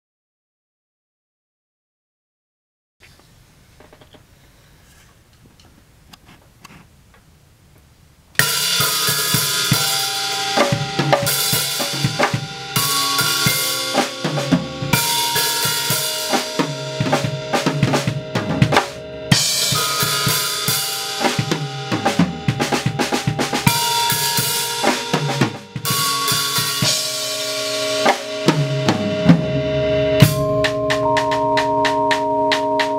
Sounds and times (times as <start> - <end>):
Drum kit: 8.4 - 32.9.